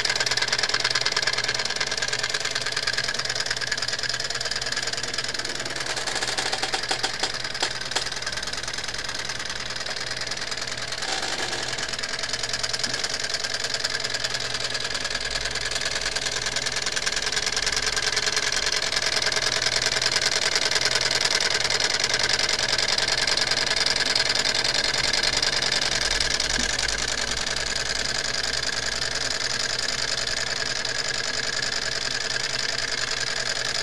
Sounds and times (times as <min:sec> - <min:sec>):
Idling: 0:00.0 - 0:33.8.